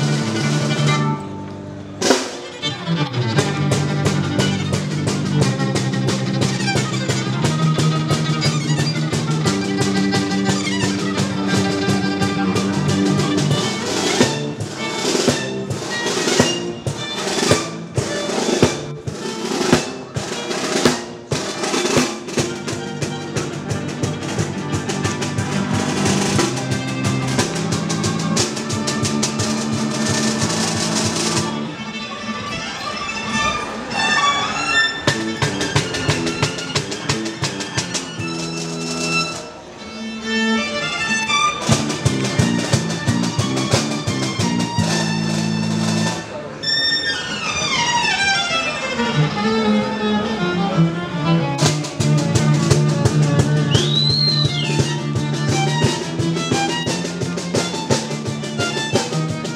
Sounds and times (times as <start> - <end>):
Violin, fiddle: 0.0 - 59.5.